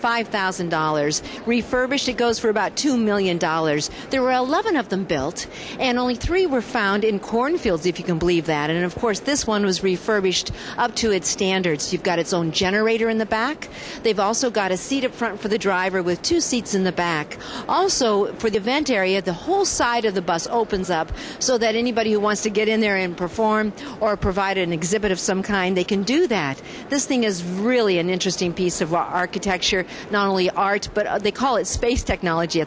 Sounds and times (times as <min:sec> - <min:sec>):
Speech: 0:00.0 - 0:32.6.